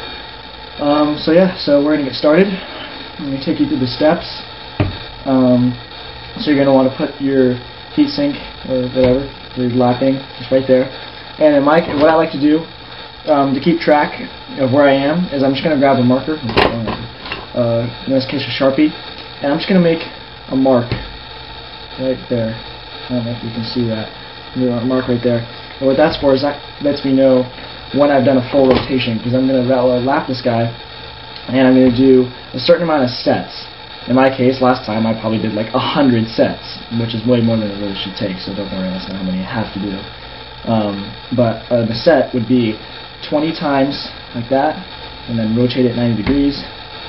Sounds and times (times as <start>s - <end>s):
Speech: 0.8s - 4.5s, 5.3s - 5.8s, 6.4s - 12.7s, 13.3s - 21.0s, 22.0s - 30.8s, 31.4s - 46.7s.